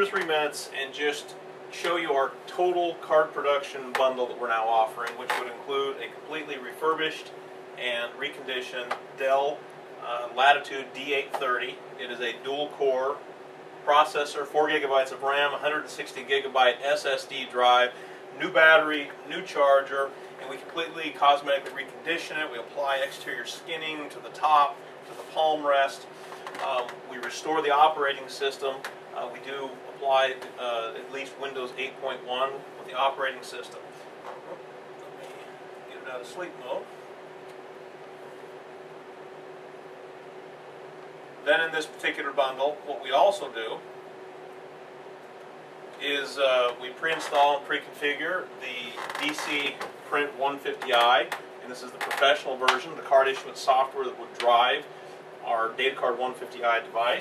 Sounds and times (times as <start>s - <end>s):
Speech: 0.0s - 13.2s, 13.8s - 33.9s, 35.2s - 36.9s, 41.4s - 43.9s, 46.0s - 57.2s.